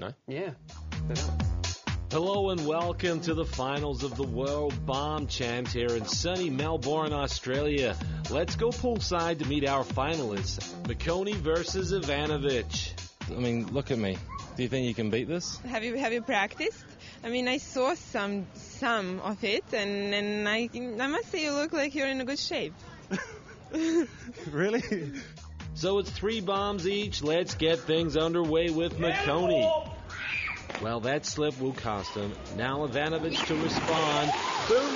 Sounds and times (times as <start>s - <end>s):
Music: 0.4s - 16.2s, 20.2s - 34.9s.